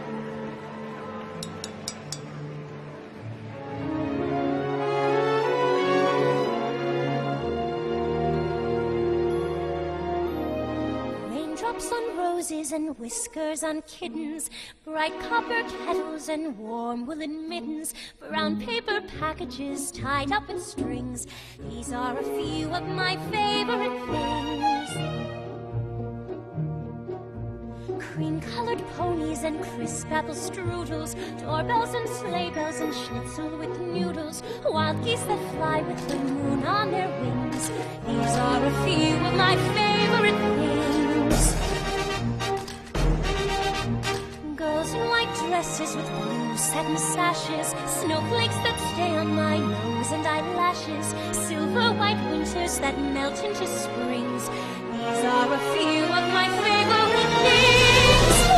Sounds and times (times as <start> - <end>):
Music: 0.0 - 58.5.